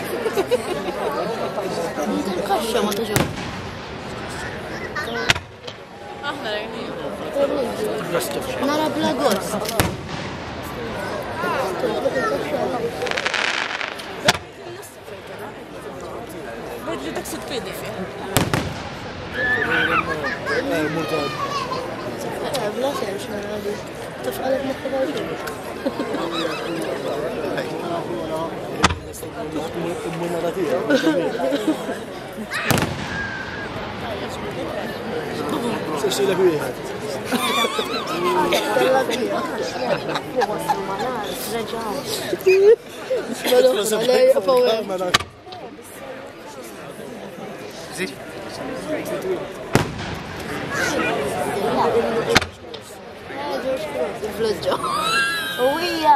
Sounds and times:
Fireworks: 0:03.0 - 0:05.8, 0:09.4 - 0:11.8, 0:12.8 - 0:14.9, 0:18.3 - 0:19.7, 0:32.6 - 0:34.7, 0:49.7 - 0:51.3, 0:52.3 - 0:52.9
Speech: 0:10.6 - 0:32.9, 0:33.7 - 0:56.1.

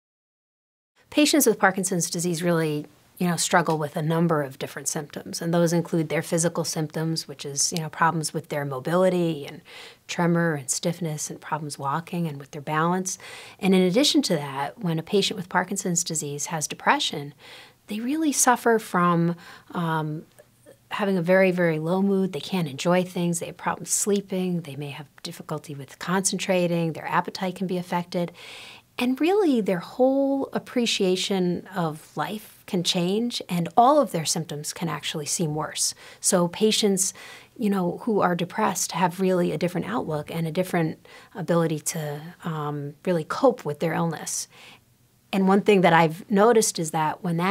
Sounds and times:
Speech: 0:01.1 - 0:28.4, 0:29.0 - 0:44.5, 0:45.3 - 0:47.5.

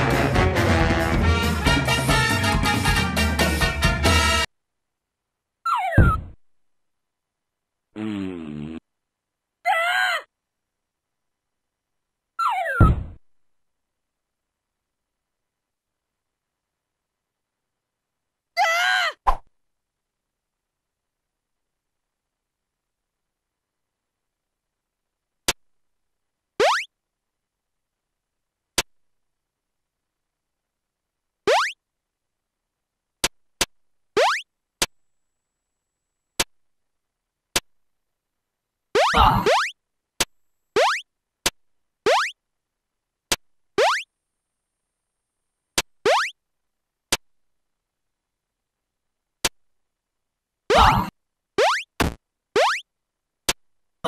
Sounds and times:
Silence: 0:04.4 - 0:07.9, 0:10.3 - 0:18.5, 0:19.3 - 0:38.9, 0:39.7 - 0:54.0.

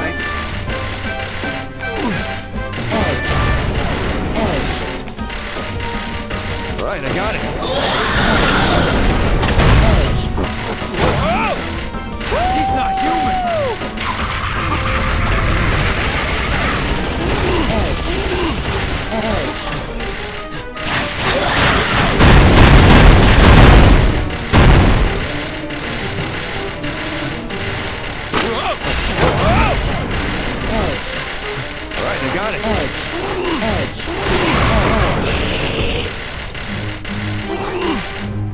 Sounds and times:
Music: 0:00.0 - 0:38.5.

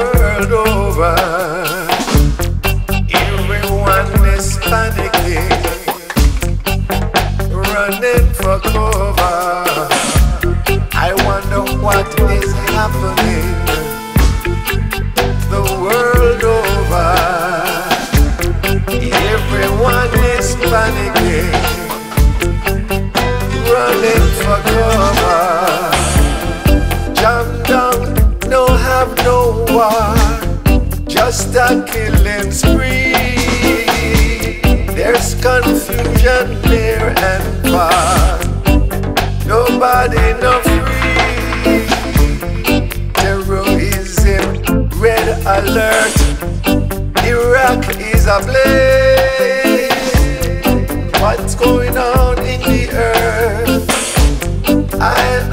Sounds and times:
Music: 0:00.0 - 0:55.5.

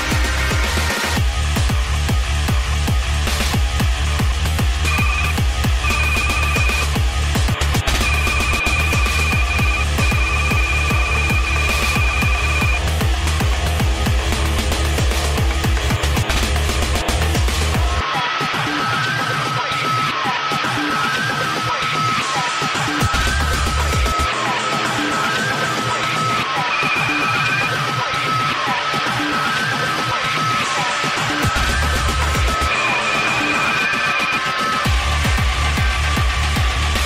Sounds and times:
Music: 0:00.0 - 0:37.0.

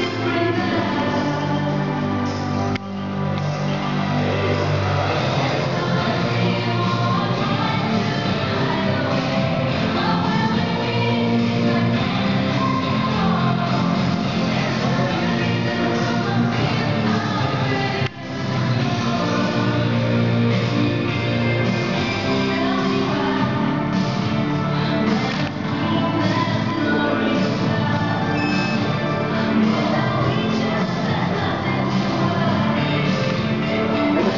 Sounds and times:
Music: 0:00.0 - 0:34.3.

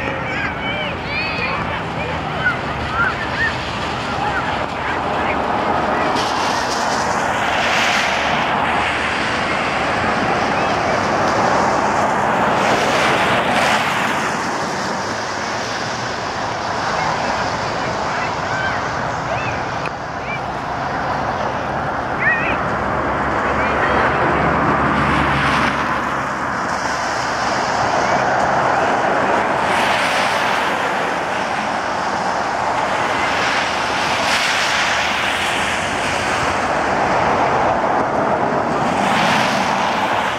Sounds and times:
Rain on surface: 0:01.3 - 0:21.5, 0:22.2 - 0:40.3.

